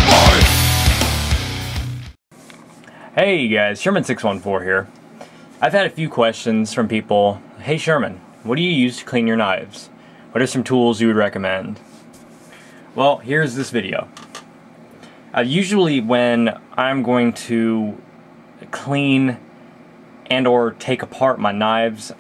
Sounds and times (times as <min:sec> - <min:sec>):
Speech: 0:03.1 - 0:04.9, 0:05.6 - 0:11.8, 0:13.0 - 0:14.2, 0:15.4 - 0:19.5, 0:20.2 - 0:22.2.